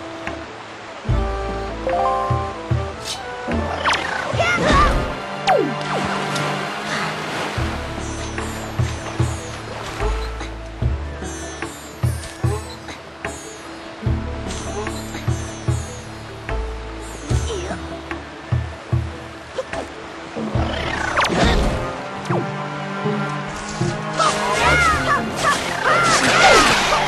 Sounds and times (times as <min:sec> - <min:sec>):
Music: 0:00.0 - 0:27.0.